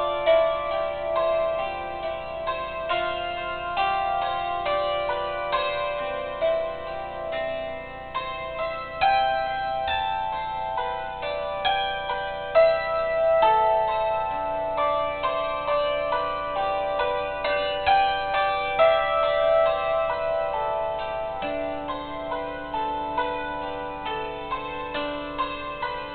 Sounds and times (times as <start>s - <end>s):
Glockenspiel: 0.0s - 26.1s.